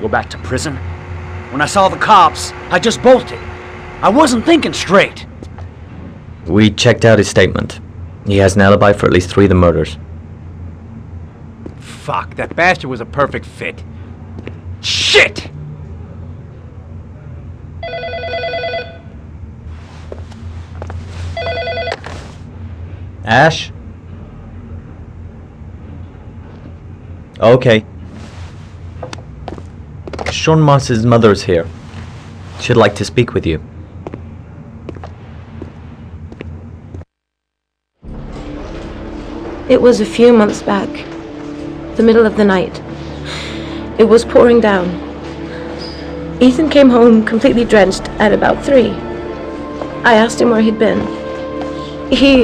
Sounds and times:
Speech: 14.8 - 15.5.

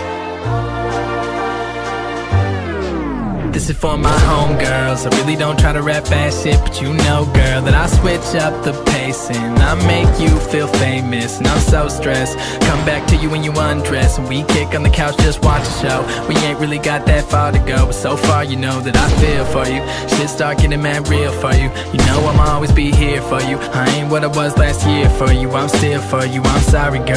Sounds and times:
Music: 0.0 - 27.1.

